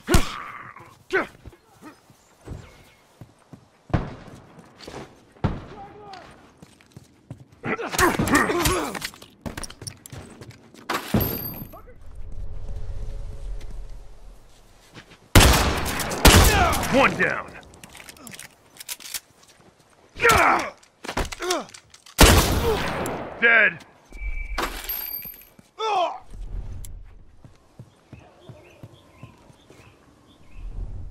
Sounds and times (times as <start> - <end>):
Speech: 16.5 - 17.6.